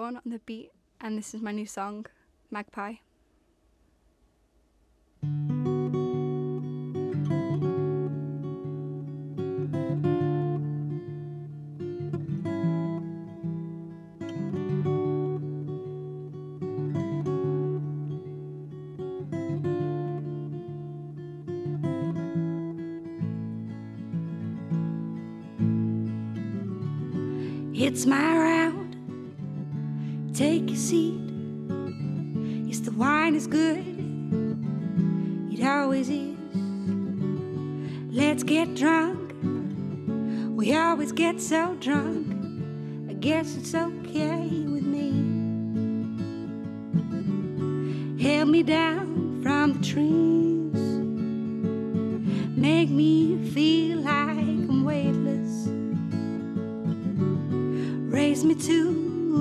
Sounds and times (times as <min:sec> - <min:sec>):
Acoustic guitar: 0:05.2 - 0:59.4.